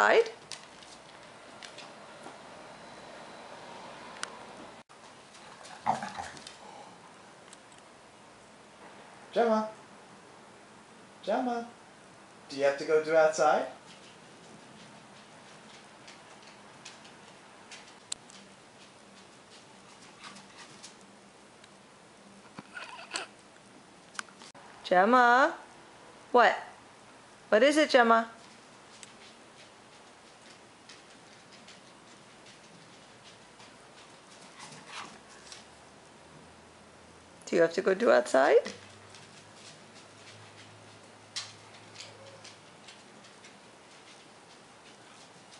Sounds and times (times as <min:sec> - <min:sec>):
Speech: 0:00.0 - 0:00.4, 0:12.5 - 0:13.8, 0:27.5 - 0:28.4, 0:37.5 - 0:38.8.